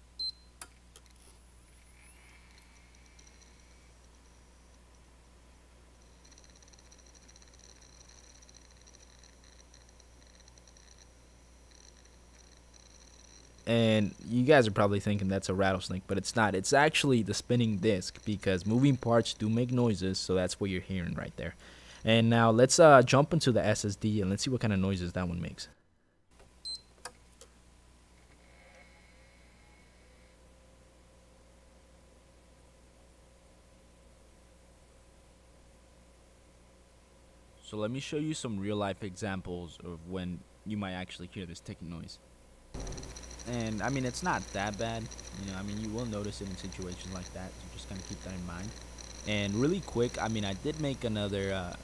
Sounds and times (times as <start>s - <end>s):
Speech: 13.7s - 25.7s, 37.6s - 42.2s, 43.5s - 48.7s, 49.3s - 51.8s.